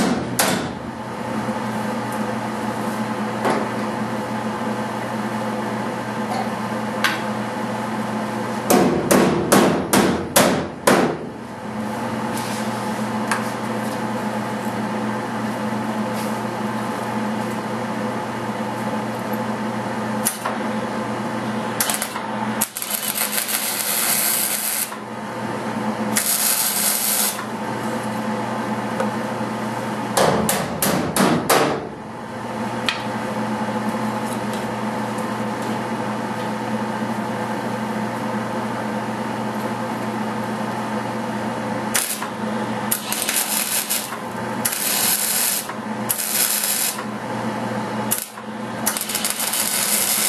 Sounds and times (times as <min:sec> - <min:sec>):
Inside, large room or hall: 0:21.7 - 0:25.0, 0:26.1 - 0:27.5, 0:41.9 - 0:42.3, 0:42.9 - 0:47.0, 0:48.1 - 0:50.2.